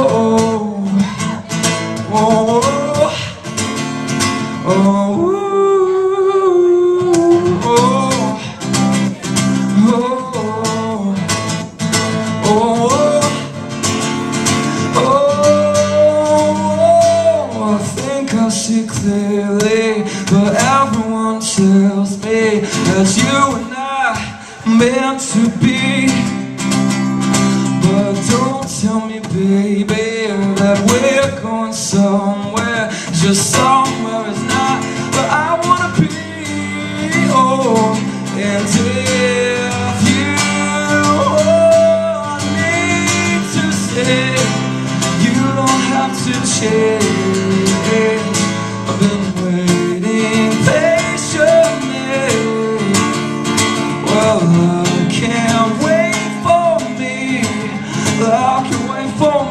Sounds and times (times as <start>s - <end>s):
Male singing: 0.0s - 1.1s, 2.0s - 3.4s, 4.6s - 8.6s, 9.7s - 11.4s, 12.4s - 13.5s, 14.9s - 26.4s, 27.8s - 53.2s, 54.0s - 59.5s
Music: 0.0s - 59.5s.